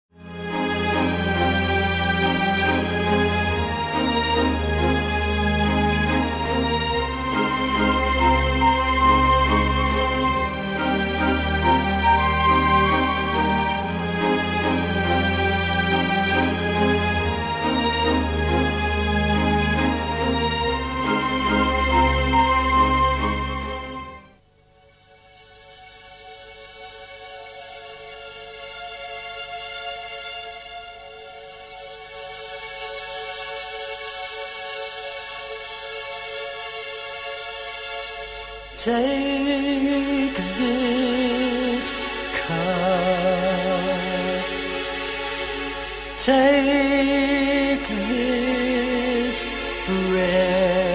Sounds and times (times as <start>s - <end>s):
Sad music: 0.2s - 24.4s, 25.0s - 50.9s.